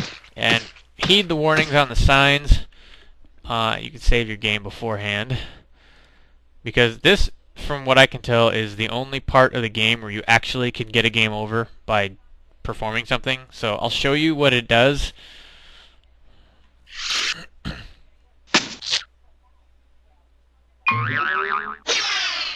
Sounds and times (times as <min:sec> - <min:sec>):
Speech: 0:00.4 - 0:02.7, 0:03.4 - 0:05.6, 0:06.7 - 0:15.2, 0:19.2 - 0:20.9.